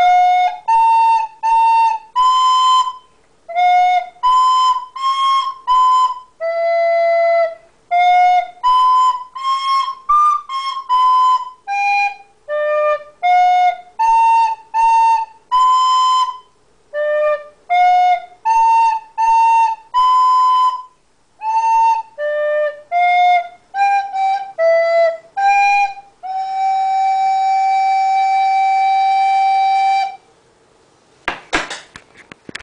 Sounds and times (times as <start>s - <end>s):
Flute: 0.0s - 30.3s.